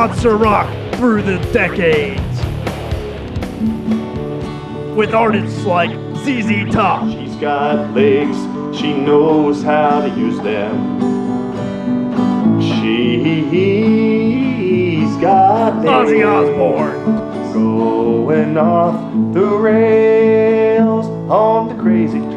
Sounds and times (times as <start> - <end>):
Speech: 0.0 - 2.5, 5.0 - 7.5, 15.8 - 17.0
Music: 0.0 - 22.3.